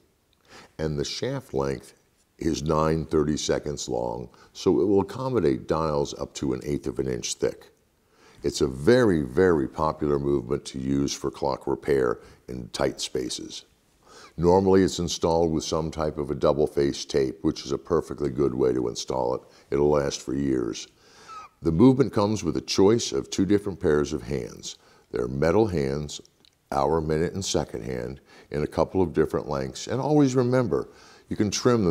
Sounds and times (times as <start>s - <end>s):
Speech: 0.8s - 7.8s, 8.4s - 13.7s, 14.3s - 31.9s.